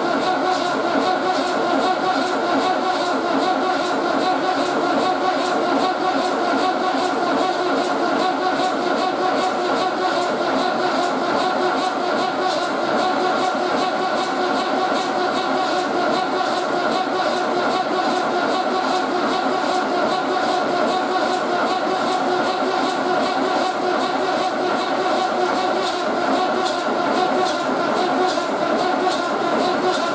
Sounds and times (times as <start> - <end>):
Heavy engine (low frequency): 0.0 - 30.1.